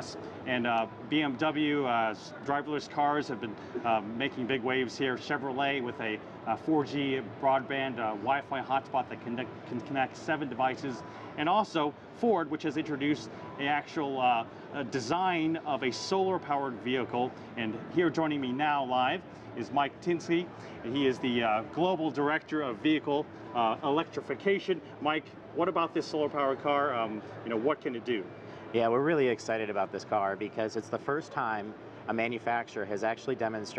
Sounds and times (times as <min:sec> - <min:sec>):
Speech: 0:00.0 - 0:33.7.